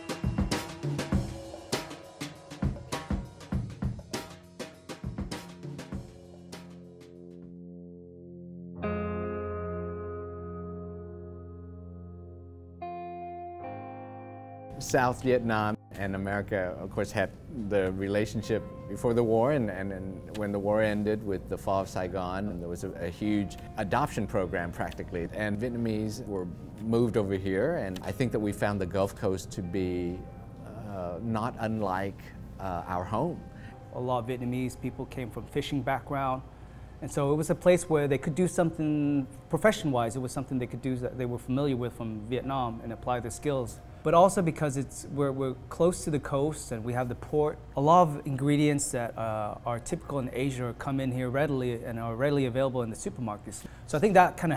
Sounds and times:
Drum: 0.0s - 6.8s.

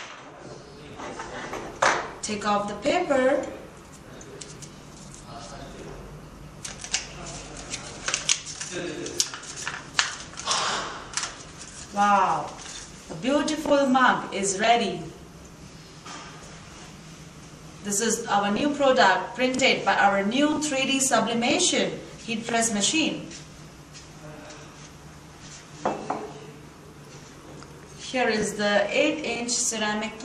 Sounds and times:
Female speech, woman speaking: 2.2s - 3.6s, 11.9s - 15.2s, 17.8s - 23.4s, 28.0s - 30.2s.

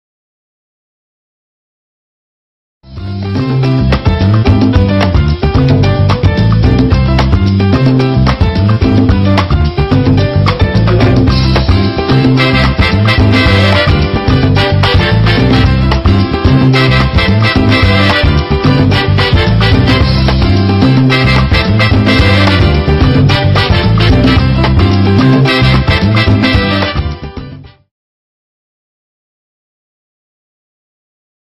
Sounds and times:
Music: 2.8s - 27.9s.

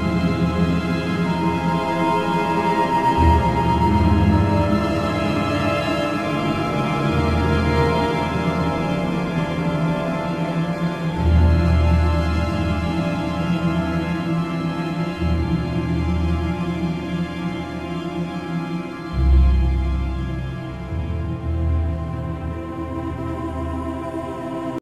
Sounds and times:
Background music: 0.0s - 24.8s
Scary music: 0.0s - 24.8s
Soundtrack music: 0.0s - 24.8s.

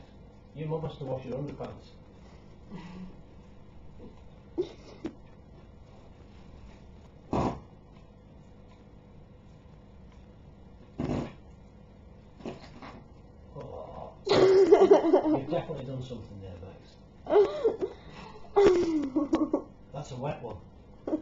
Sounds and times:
Fart: 7.3s - 7.7s, 11.0s - 11.4s, 12.4s - 13.0s.

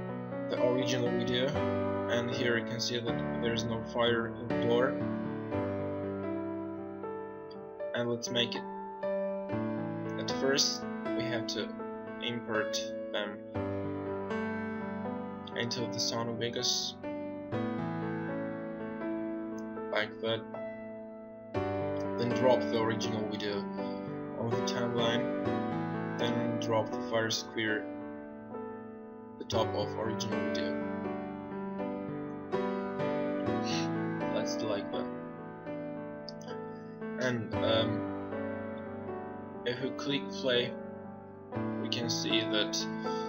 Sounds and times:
Music: 0.0s - 43.2s
Speech: 0.5s - 5.0s, 8.0s - 8.6s, 10.2s - 13.4s, 15.6s - 17.0s, 20.0s - 20.4s, 22.2s - 23.7s, 24.4s - 25.3s, 26.2s - 27.8s, 29.4s - 30.8s, 33.7s - 35.1s, 37.2s - 38.0s, 39.7s - 40.8s, 41.8s - 43.2s.

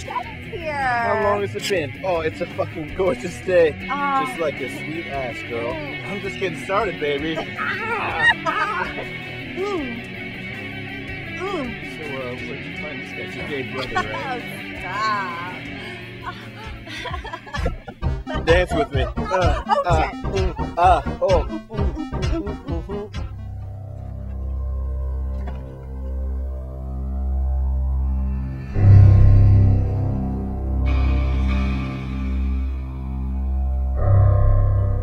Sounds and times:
Speech: 0.0s - 8.3s, 18.3s - 21.5s
Music: 0.0s - 35.0s.

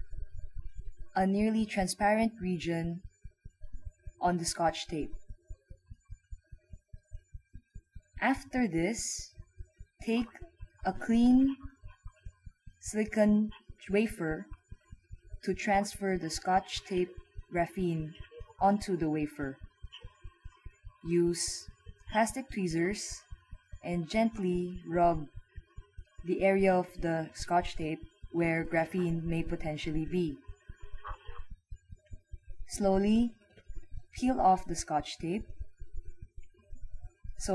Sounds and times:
Speech: 1.2s - 3.0s, 4.2s - 5.2s, 8.2s - 9.3s, 10.0s - 11.8s, 12.8s - 14.5s, 15.4s - 19.6s, 21.0s - 23.2s, 23.8s - 25.3s, 26.3s - 30.4s, 32.7s - 33.4s, 34.2s - 35.4s.

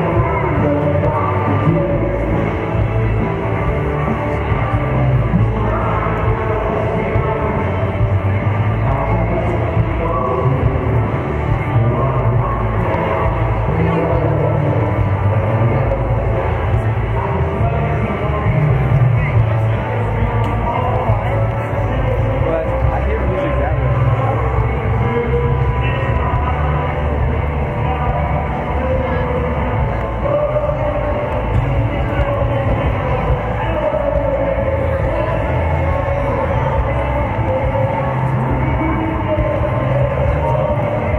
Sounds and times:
Music: 0.0s - 41.1s
Speech: 0.0s - 41.1s.

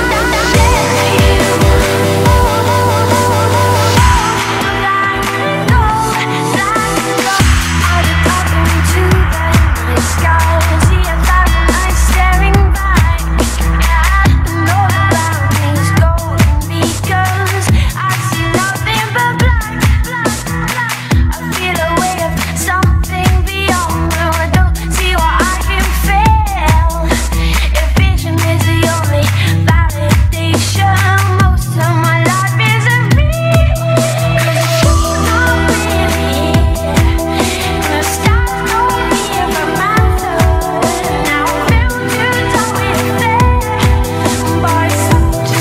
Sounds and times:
Dance music: 0.0s - 45.6s.

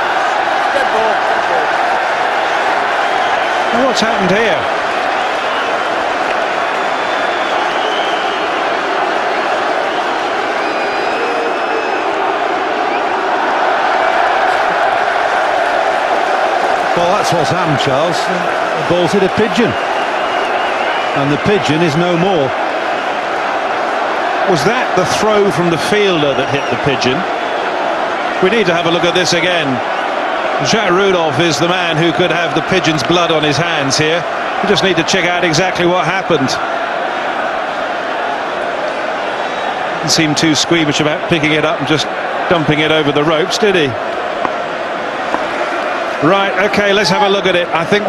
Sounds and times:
Speech: 3.7s - 4.7s, 17.0s - 19.8s, 21.2s - 22.5s, 24.5s - 27.2s, 28.4s - 29.8s, 30.6s - 36.6s, 40.0s - 44.0s, 46.2s - 48.0s.

